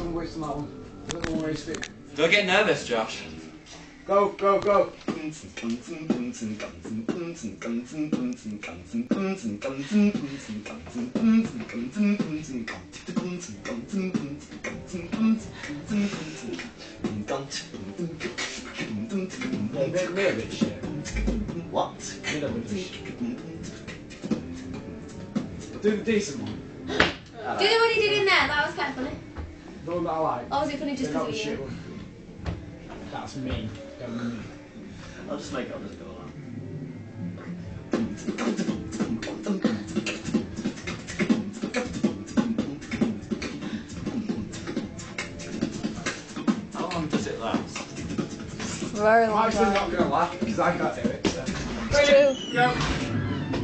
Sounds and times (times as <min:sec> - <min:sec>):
Beatboxing: 0:04.4 - 0:27.3, 0:37.4 - 0:53.0.